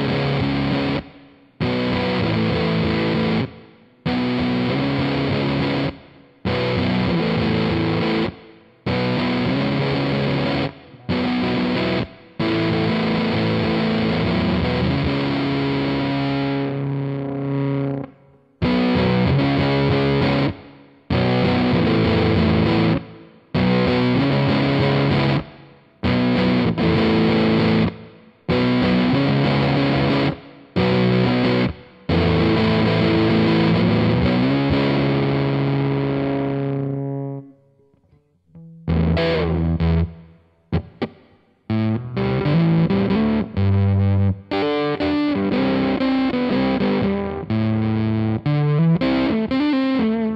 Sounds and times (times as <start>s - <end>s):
Distortion: 0.0s - 50.3s
Music: 0.0s - 50.3s.